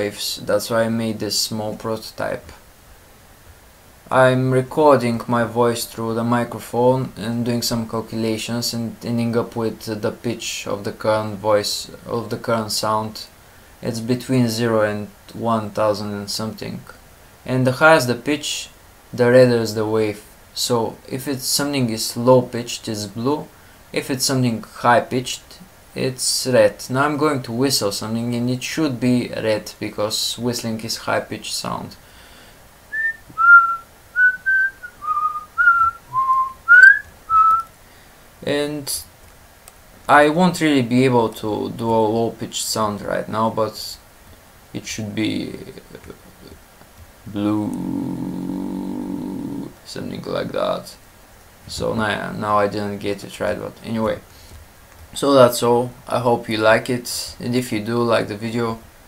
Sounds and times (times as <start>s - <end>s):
Speech: 0.0s - 2.6s, 4.1s - 32.0s, 38.4s - 39.1s, 40.1s - 44.0s, 44.8s - 46.6s, 47.3s - 51.0s, 51.7s - 54.3s, 55.2s - 58.9s.